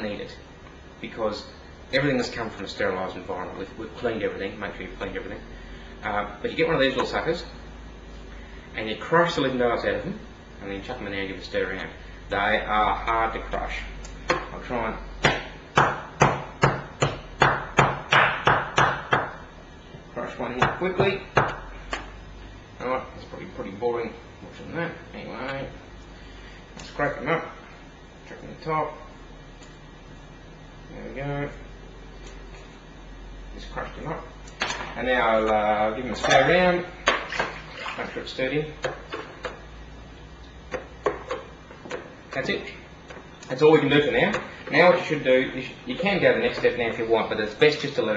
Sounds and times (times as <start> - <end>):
Speech: 0.0 - 0.4, 1.0 - 5.4, 6.0 - 7.6, 8.8 - 15.1, 20.1 - 21.3, 22.8 - 25.8, 26.9 - 27.6, 28.3 - 29.1, 30.9 - 31.6, 33.5 - 34.3, 35.0 - 37.0, 37.9 - 38.8, 42.3 - 42.8, 43.5 - 48.1
Inside, small room: 0.0 - 48.1.